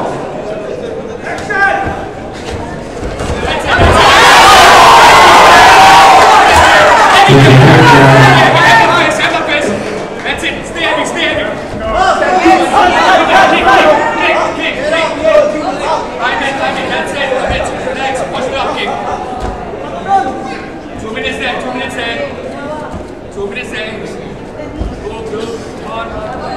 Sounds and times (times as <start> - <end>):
Crowd: 0.0 - 26.5.